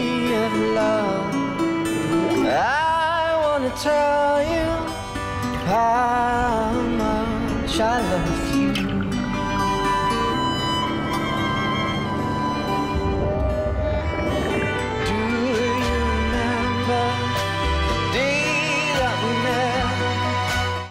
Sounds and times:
Music: 0.0 - 20.9.

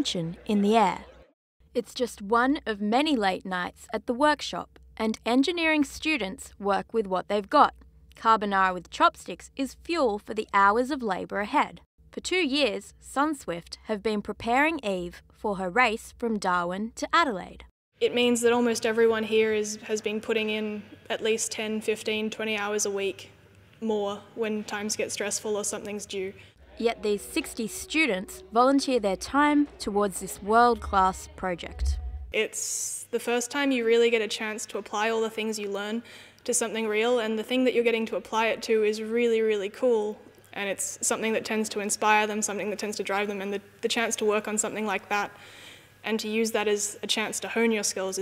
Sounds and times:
Speech: 0.0 - 1.2, 1.8 - 45.4, 46.1 - 48.2.

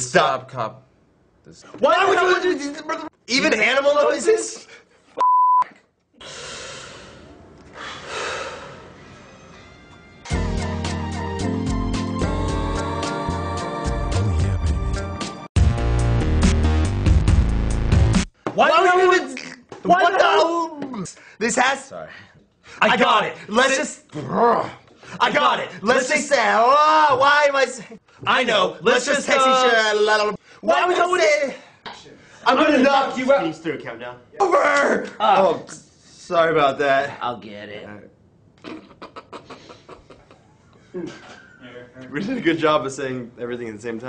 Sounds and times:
Speech: 18.6 - 22.2, 22.8 - 38.1, 41.0 - 44.0.

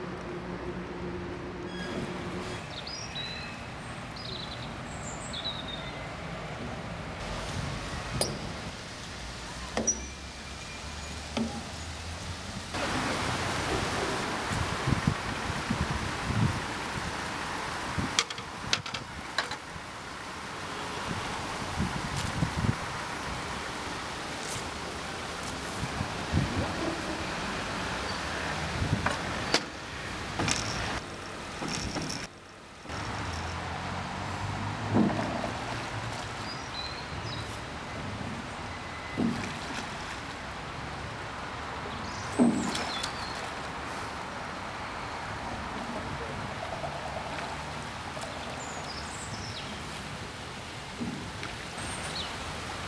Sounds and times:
Boat, Water vehicle: 0.0 - 52.8.

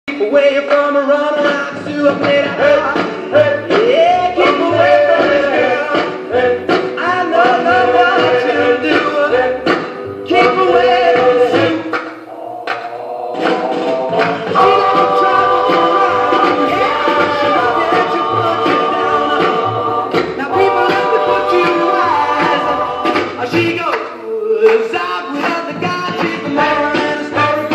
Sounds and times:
Music of Latin America: 0.0 - 27.7.

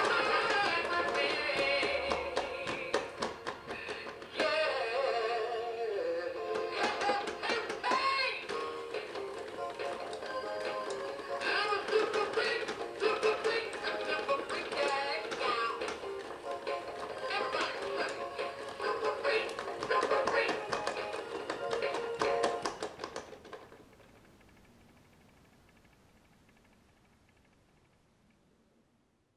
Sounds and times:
Male singing: 0.0 - 3.2, 4.3 - 8.5, 11.3 - 16.0, 17.2 - 21.0
Music: 0.0 - 23.2.

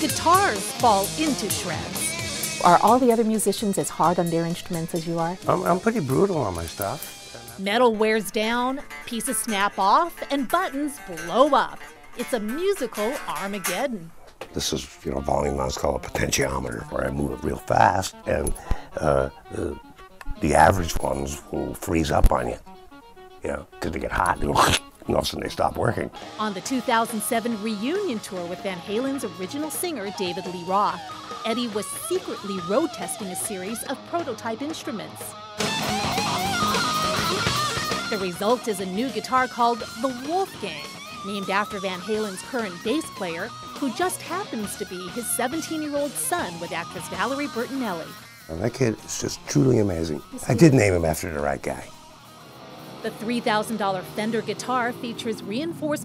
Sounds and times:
Speech: 0.0 - 22.6, 23.4 - 35.3, 38.1 - 51.9, 53.1 - 56.0
Guitar: 0.0 - 56.0.

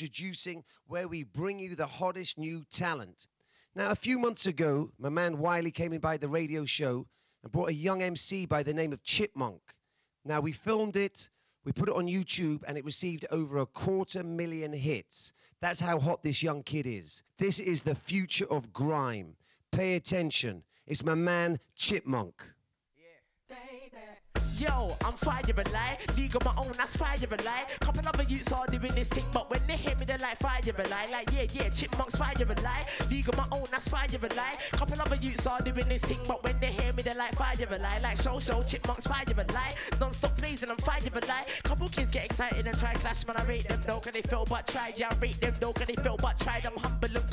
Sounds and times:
Speech: 0.0 - 23.2
Music: 24.3 - 47.3.

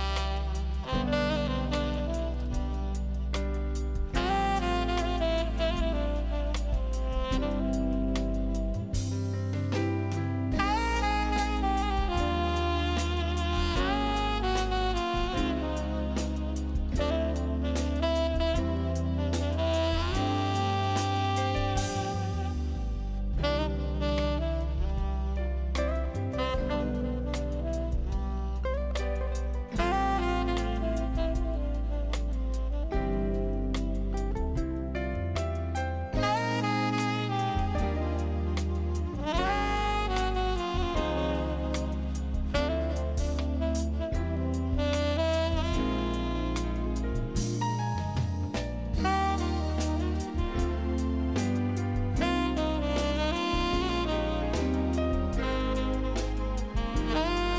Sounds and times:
Music: 0.0 - 57.5.

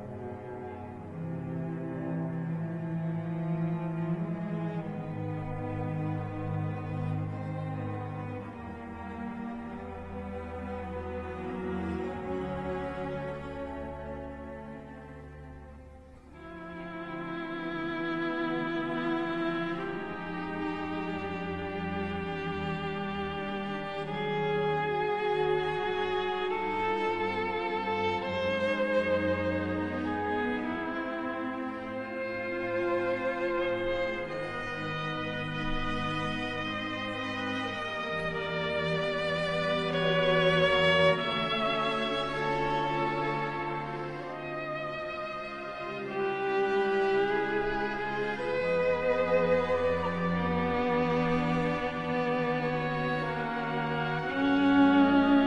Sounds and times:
Violin, fiddle: 0.0 - 55.4.

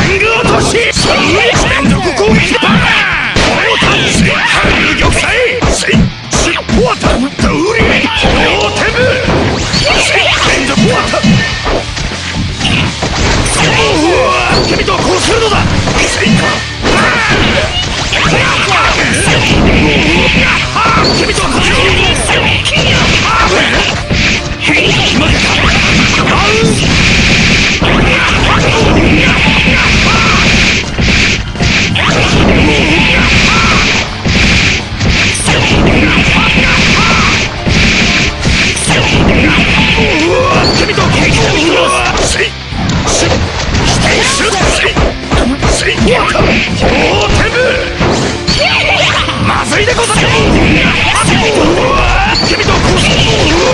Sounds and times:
Speech: 0.0 - 9.3, 9.9 - 11.4, 13.5 - 24.0, 24.6 - 26.8, 27.8 - 30.4, 32.0 - 33.8, 35.4 - 37.4, 38.8 - 42.5, 43.1 - 47.9, 48.6 - 53.7
Music: 0.0 - 53.7.

